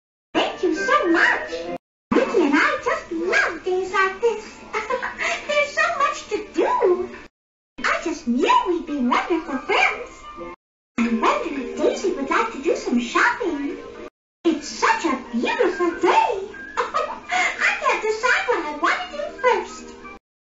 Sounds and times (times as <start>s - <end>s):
Speech: 0.4s - 7.2s, 7.8s - 10.3s, 11.0s - 13.8s, 14.5s - 16.6s, 17.3s - 20.0s.